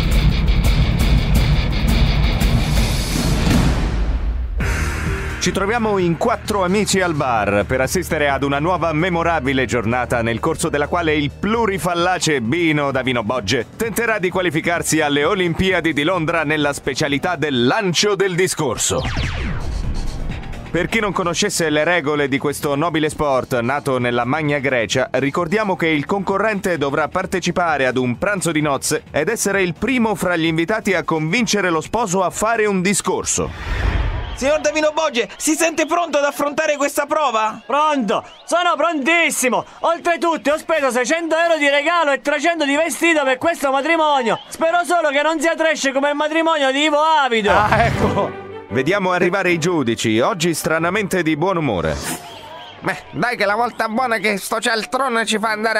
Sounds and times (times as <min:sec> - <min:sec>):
Music: 0:00.0 - 0:55.7
Speech: 0:05.4 - 0:19.1, 0:20.7 - 0:33.5, 0:34.4 - 0:52.1, 0:52.8 - 0:55.7.